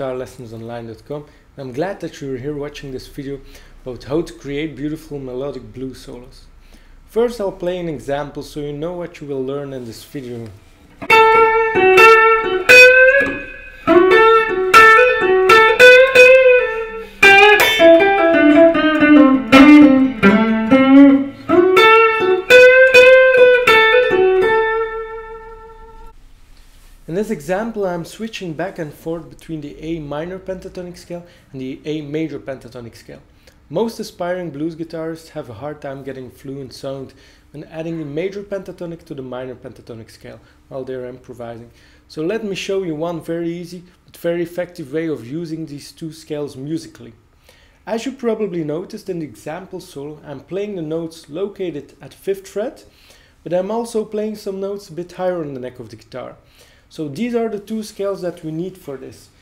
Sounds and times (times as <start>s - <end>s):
Speech: 0.0s - 6.5s, 7.1s - 10.6s, 27.1s - 47.2s, 47.8s - 59.4s.